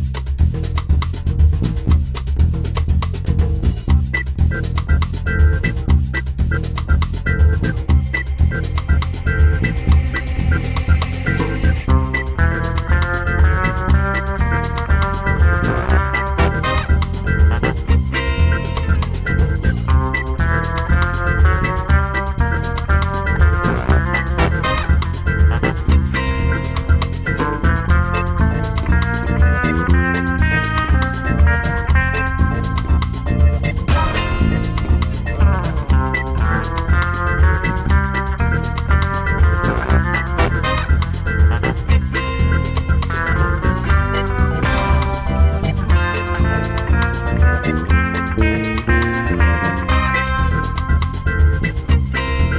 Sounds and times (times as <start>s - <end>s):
Music: 0.0s - 52.5s.